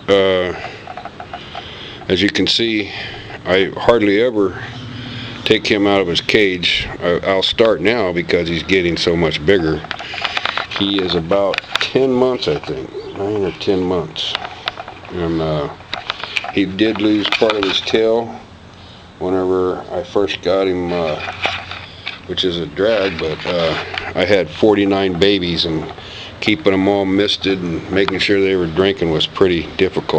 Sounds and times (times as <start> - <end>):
Speech: 0.1 - 0.6, 2.1 - 4.7, 5.4 - 9.9, 10.8 - 14.4, 15.1 - 15.8, 16.5 - 18.4, 19.2 - 21.3, 22.3 - 30.1.